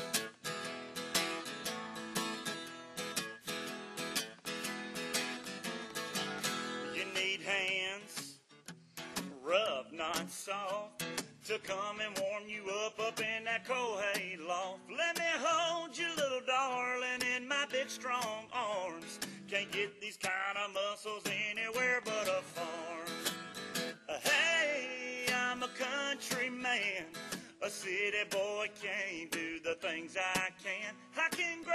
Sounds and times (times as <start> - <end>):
Country: 0.0 - 31.7
Male singing: 6.8 - 8.4, 9.4 - 23.3, 24.1 - 31.7.